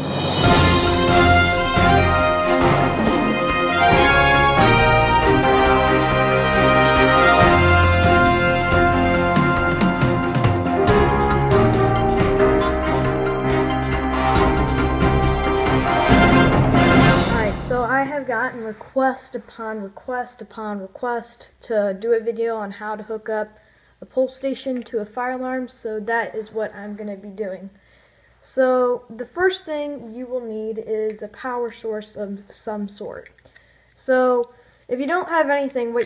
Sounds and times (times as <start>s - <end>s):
Speech: 17.4s - 27.8s, 28.5s - 33.3s, 34.0s - 36.0s.